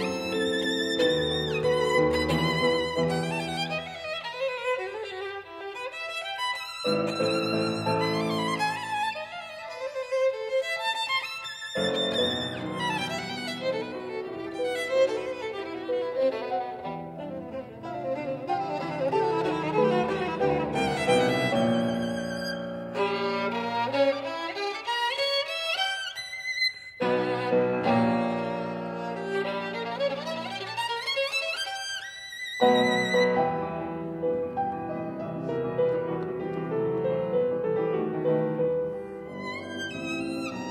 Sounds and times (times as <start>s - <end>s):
Violin, fiddle: 0.0s - 40.7s.